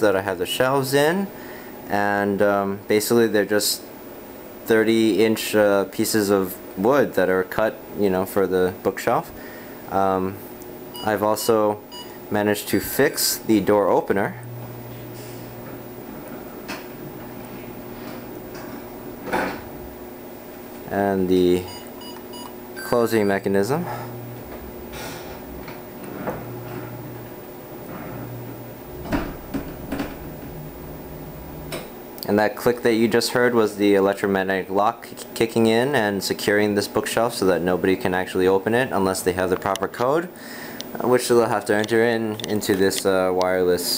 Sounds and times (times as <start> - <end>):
Speech: 0.0 - 1.3, 1.9 - 3.9, 4.7 - 9.3, 9.9 - 10.4, 11.0 - 14.4, 20.9 - 21.8, 22.8 - 24.0, 32.2 - 40.3, 41.0 - 43.9
Door: 29.0 - 30.3.